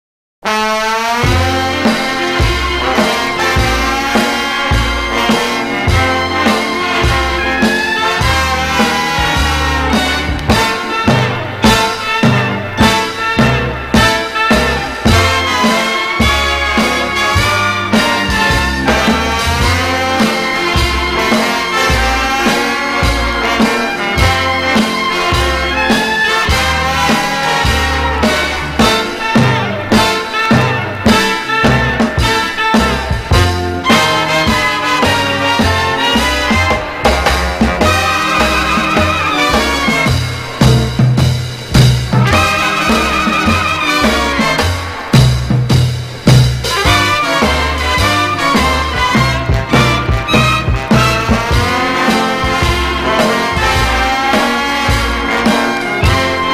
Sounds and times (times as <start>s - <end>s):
Orchestra: 0.4s - 56.5s.